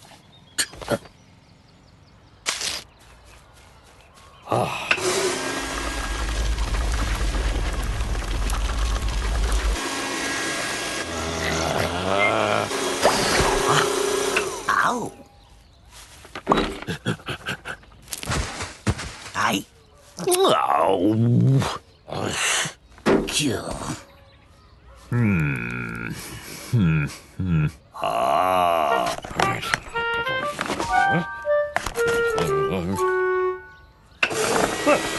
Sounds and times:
Outside, rural or natural: 0.0 - 35.1.

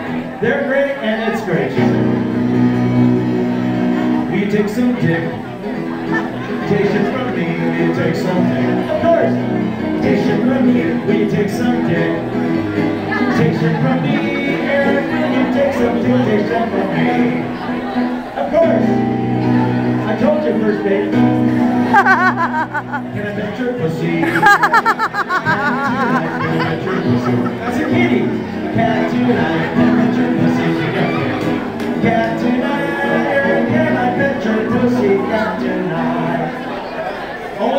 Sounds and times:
Music: 1.4 - 36.7.

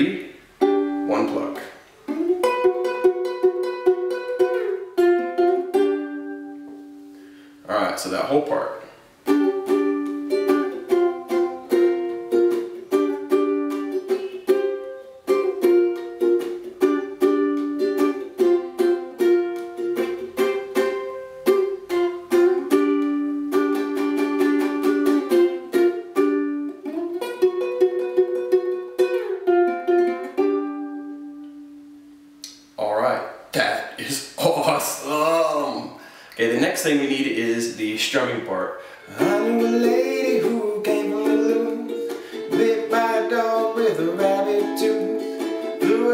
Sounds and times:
Speech: 0.0 - 0.4, 1.1 - 1.8, 7.6 - 8.9, 32.8 - 38.8
Ukulele: 0.0 - 7.6, 8.2 - 32.8, 33.6 - 46.1
Pizzicato: 0.5 - 7.2, 9.2 - 32.5, 39.1 - 46.1.

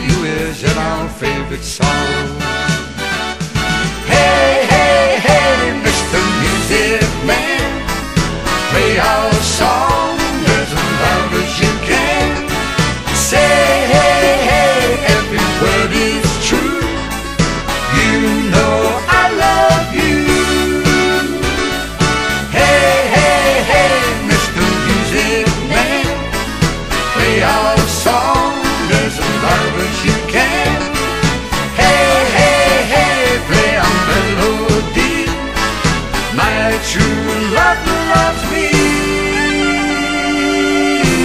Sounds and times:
Soundtrack music: 0.0 - 41.2.

